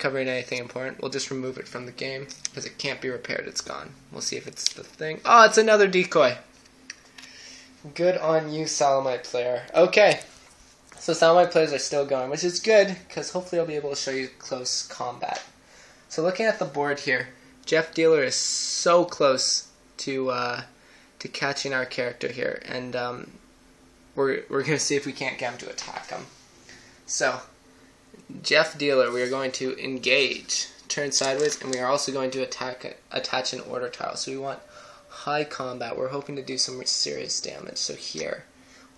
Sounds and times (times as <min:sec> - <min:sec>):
Speech: 0:00.0 - 0:06.5, 0:07.8 - 0:10.3, 0:11.0 - 0:15.5, 0:16.1 - 0:23.4, 0:24.2 - 0:26.3, 0:27.1 - 0:27.5, 0:28.2 - 0:38.5.